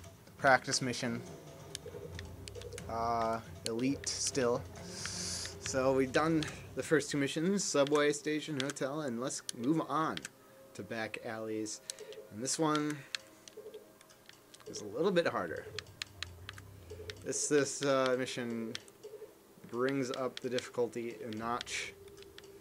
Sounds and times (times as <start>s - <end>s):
Speech: 0.4s - 1.2s, 2.9s - 4.6s, 5.7s - 11.8s, 12.4s - 13.0s, 14.7s - 15.7s, 17.3s - 18.8s, 19.7s - 22.0s.